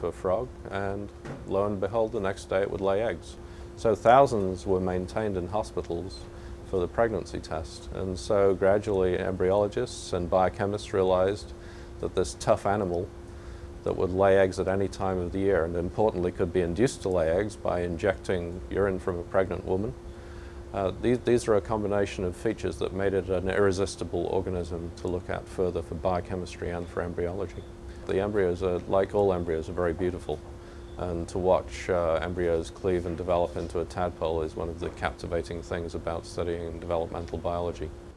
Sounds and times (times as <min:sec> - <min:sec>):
Speech: 0:00.0 - 0:13.1, 0:13.8 - 0:20.0, 0:20.7 - 0:30.4, 0:31.0 - 0:38.0.